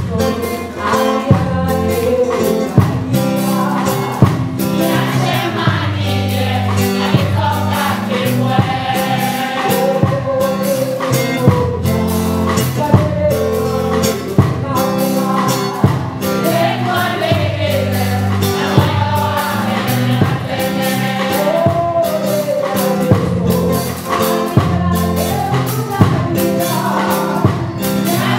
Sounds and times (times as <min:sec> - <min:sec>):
Choir: 0:00.0 - 0:11.8, 0:13.4 - 0:28.3.